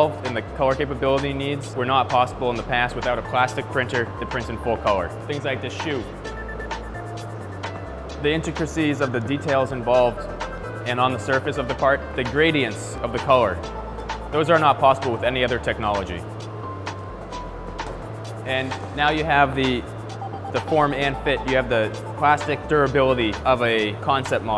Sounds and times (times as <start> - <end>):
Speech: 0.0 - 6.2, 8.2 - 10.3, 10.9 - 13.6, 14.4 - 16.2, 18.5 - 19.9, 20.6 - 24.5
Music: 0.0 - 24.5.